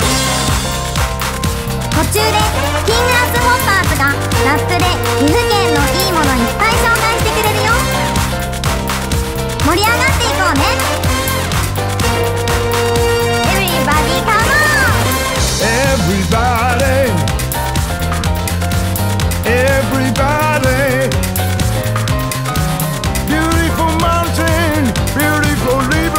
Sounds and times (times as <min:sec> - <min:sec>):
Funny music: 0:00.0 - 0:26.1
Speech: 0:02.0 - 0:07.9, 0:09.6 - 0:10.9, 0:13.5 - 0:15.0.